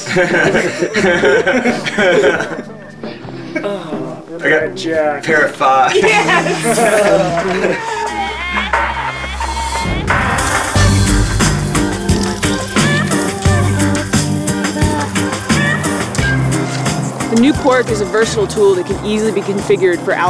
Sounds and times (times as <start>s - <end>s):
Music: 0.0s - 20.2s.